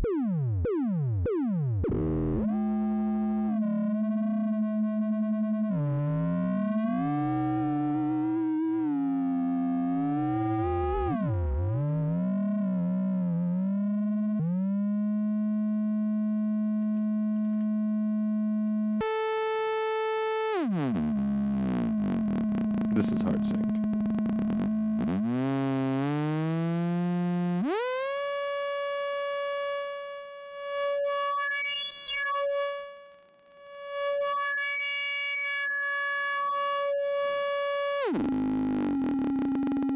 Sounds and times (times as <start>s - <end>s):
Chirp tone: 0.0s - 39.9s.